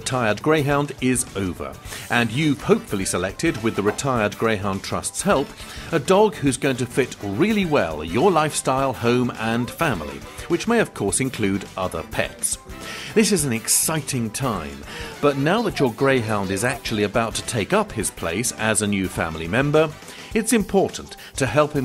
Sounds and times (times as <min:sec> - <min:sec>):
Speech: 0:00.0 - 0:12.6, 0:13.2 - 0:21.8
Music: 0:00.0 - 0:21.8.